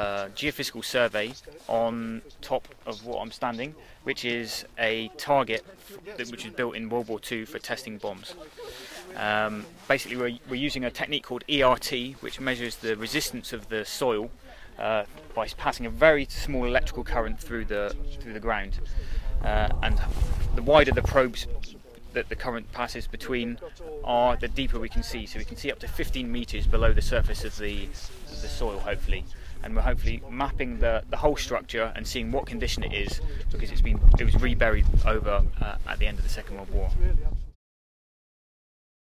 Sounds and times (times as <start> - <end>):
Speech: 0.0 - 37.5.